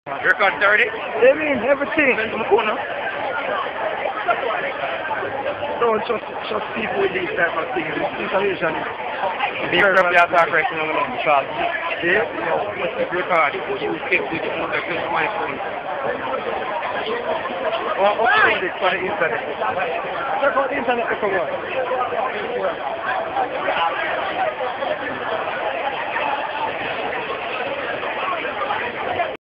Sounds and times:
Speech: 0.1 - 29.4.

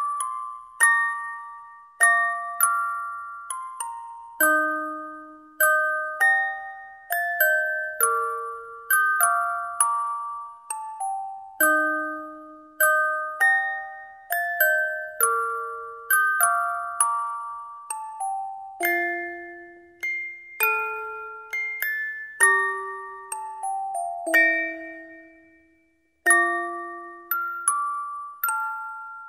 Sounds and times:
Chime: 0.0 - 29.2.

